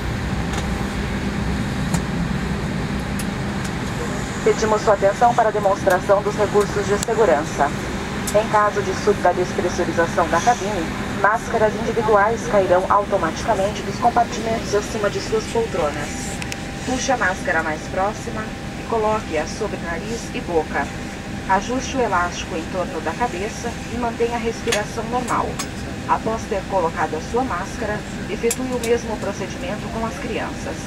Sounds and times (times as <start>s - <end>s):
Female speech, woman speaking: 4.4s - 30.8s
Speech synthesizer: 8.4s - 16.2s, 21.5s - 30.8s.